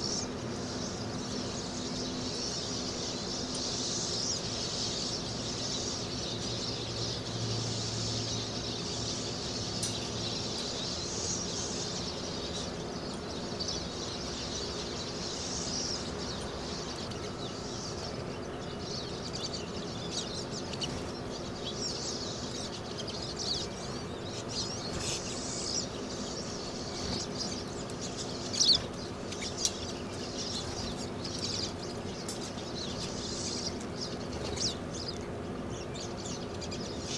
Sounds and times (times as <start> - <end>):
Bird: 0.0 - 37.1
Outside, rural or natural: 0.0 - 37.1.